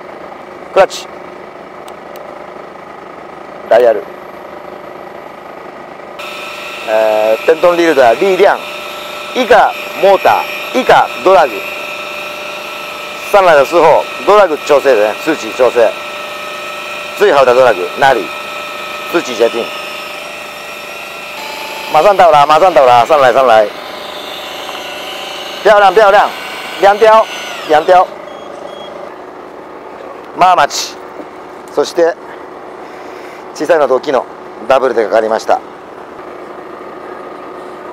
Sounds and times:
Outside, rural or natural: 0.0 - 37.9
Speech: 0.7 - 1.1, 3.7 - 4.1, 6.9 - 8.6, 9.4 - 11.7, 13.2 - 16.0, 17.2 - 18.3, 19.1 - 19.7, 21.9 - 23.7, 25.6 - 28.1, 30.4 - 31.0, 31.7 - 32.2, 33.6 - 35.7
Drill: 6.2 - 28.3.

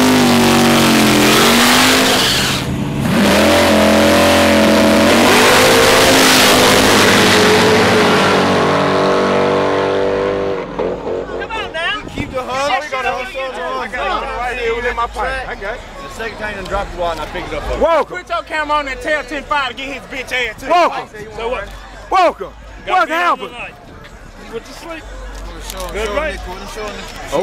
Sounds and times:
Outside, rural or natural: 0.0 - 27.4
Race car, auto racing: 0.0 - 27.4.

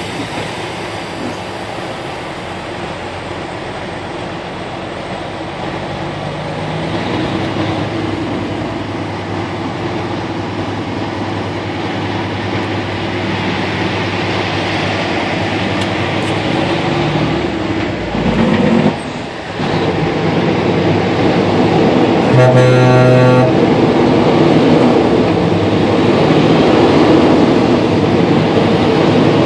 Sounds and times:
Truck: 0.0 - 29.4.

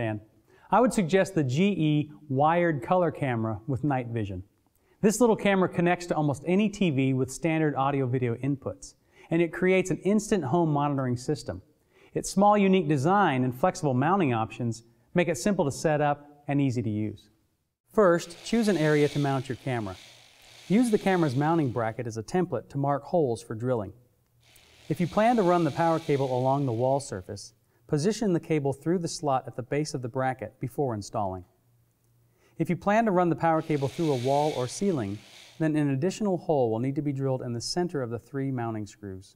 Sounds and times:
Speech: 0.0 - 11.6, 12.2 - 17.3, 18.0 - 20.0, 20.7 - 24.0, 24.9 - 31.5, 32.6 - 39.3.

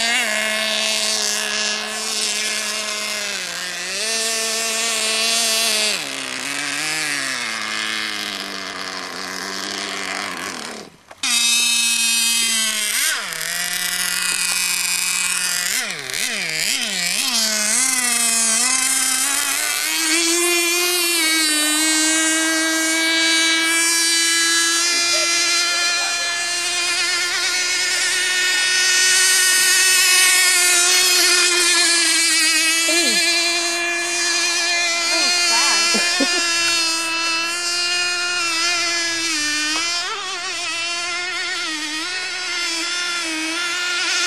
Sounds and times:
Speech: 24.9 - 26.4, 32.9 - 33.3, 35.1 - 36.0.

